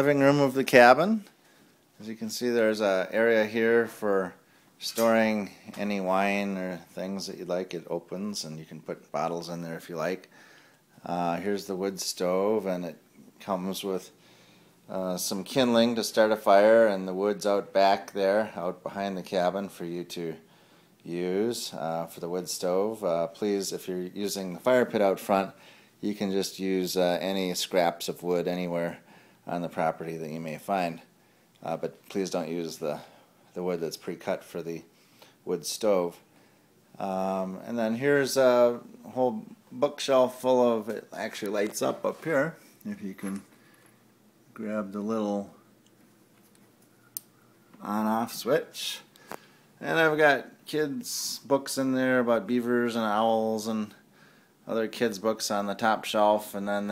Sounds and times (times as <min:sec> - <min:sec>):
Speech: 0:00.0 - 0:01.3, 0:02.0 - 0:10.3, 0:11.0 - 0:14.2, 0:14.9 - 0:36.3, 0:37.0 - 0:43.5, 0:44.5 - 0:45.7, 0:47.8 - 0:49.1, 0:49.8 - 0:54.0, 0:54.7 - 0:56.9.